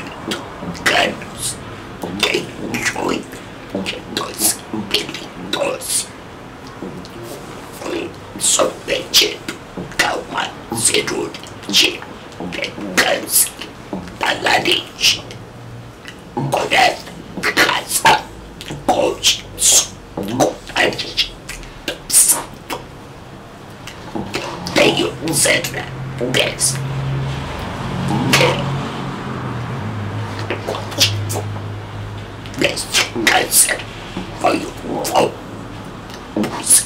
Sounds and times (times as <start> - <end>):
Speech: 0.0 - 6.2, 6.8 - 15.4, 16.4 - 22.9, 23.9 - 26.8, 28.0 - 28.8, 30.4 - 31.5, 32.5 - 35.5, 36.1 - 36.8.